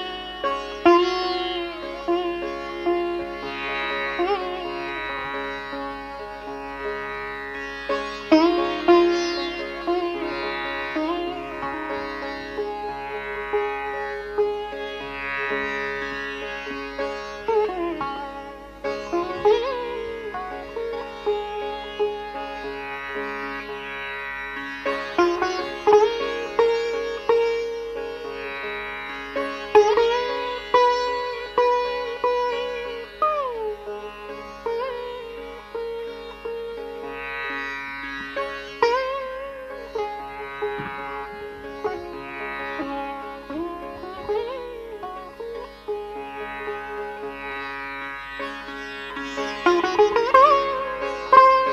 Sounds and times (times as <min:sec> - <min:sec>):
Carnatic music: 0:00.0 - 0:51.7
Classical music: 0:00.0 - 0:51.7
Sitar: 0:00.0 - 0:51.7.